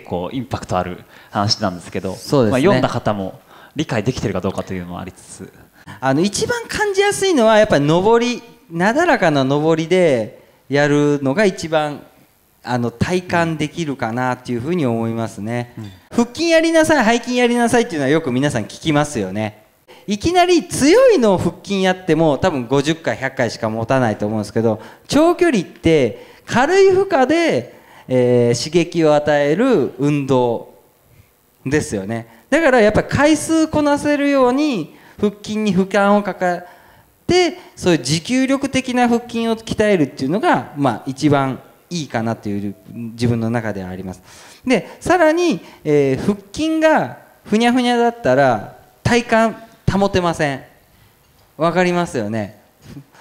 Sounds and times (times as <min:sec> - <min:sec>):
Speech: 0:00.0 - 0:30.8, 0:31.6 - 0:36.7, 0:37.3 - 0:50.8, 0:51.6 - 0:53.1.